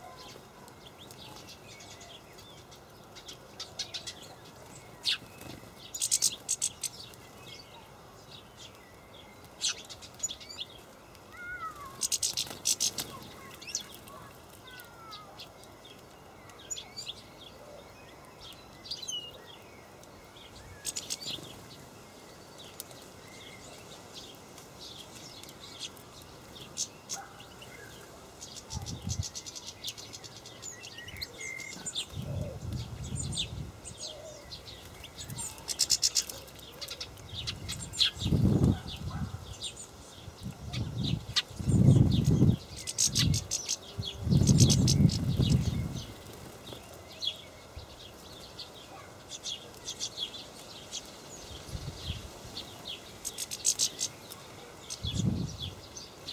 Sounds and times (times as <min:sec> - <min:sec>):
Bird: 0:00.0 - 0:56.3.